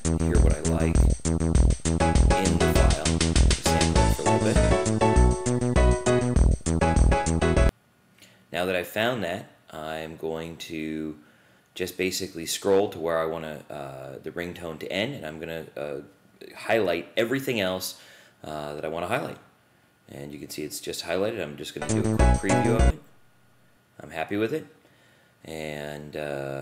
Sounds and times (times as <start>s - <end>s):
Music: 0.0s - 7.7s, 21.8s - 23.0s
Speech: 0.2s - 1.1s, 2.3s - 4.7s, 8.5s - 11.2s, 11.8s - 19.5s, 20.1s - 23.0s, 24.0s - 24.8s, 25.5s - 26.6s.